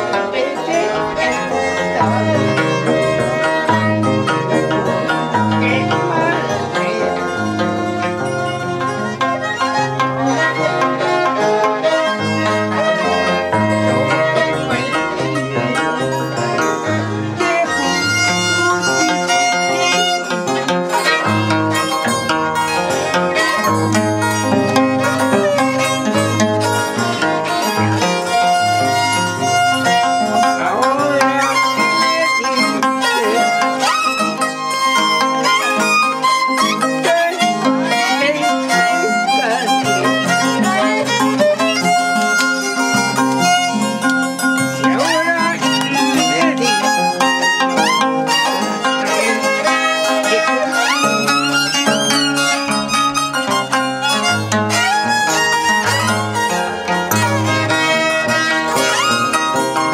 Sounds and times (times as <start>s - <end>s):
Harp: 0.0s - 59.9s.